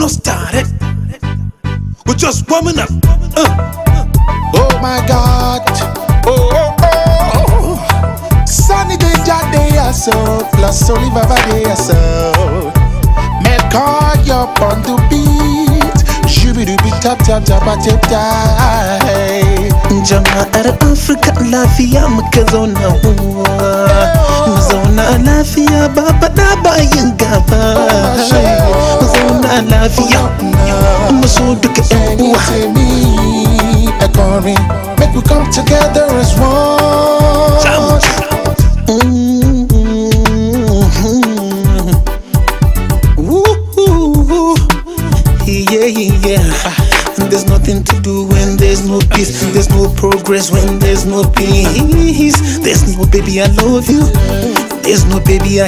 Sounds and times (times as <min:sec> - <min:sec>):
Music of Africa: 0:00.0 - 0:55.6.